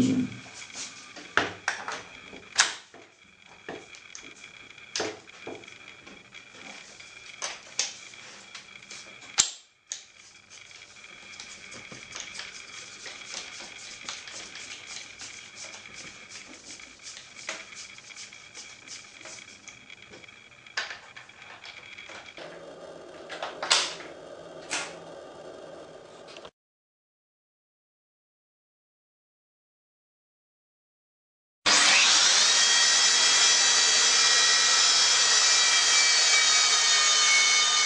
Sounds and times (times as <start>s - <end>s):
Drill: 31.7s - 37.8s.